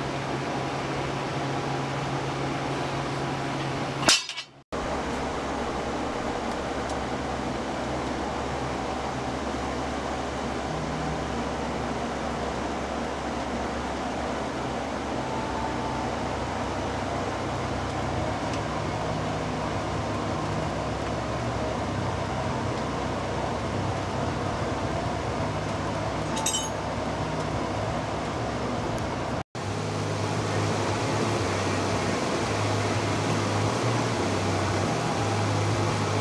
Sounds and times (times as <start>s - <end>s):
Outside, rural or natural: 0.0s - 36.2s.